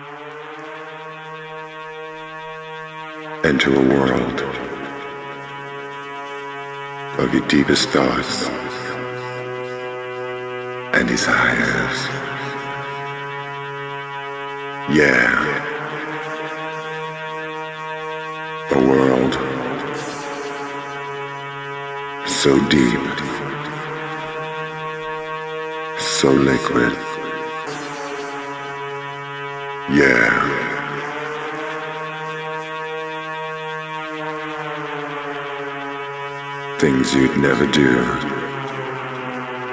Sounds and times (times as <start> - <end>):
Music: 0.1 - 37.4.